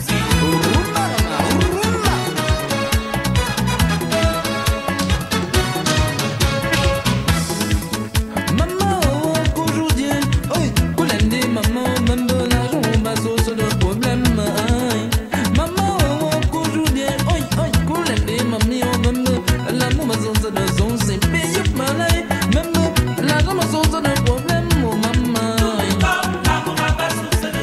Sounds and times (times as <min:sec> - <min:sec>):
Music of Africa: 0:00.0 - 0:27.6.